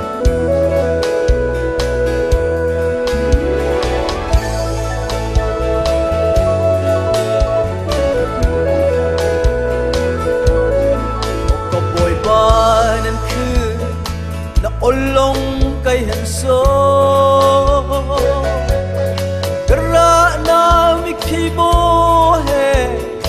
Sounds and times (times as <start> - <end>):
Music: 0.0 - 23.2.